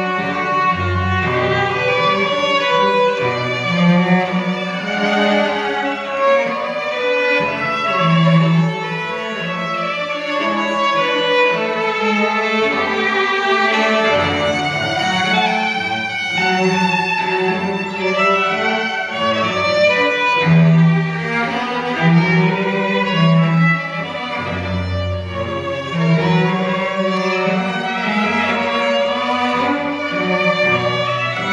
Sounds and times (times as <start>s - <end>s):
Cello: 0.0s - 31.5s
Violin, fiddle: 0.0s - 31.5s.